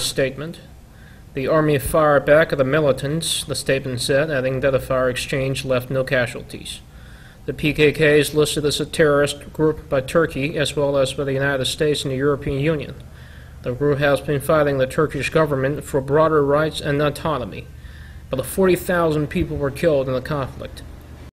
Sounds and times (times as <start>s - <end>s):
Speech: 0.0s - 0.7s, 1.4s - 6.8s, 7.5s - 13.0s, 13.6s - 17.7s, 18.3s - 20.9s.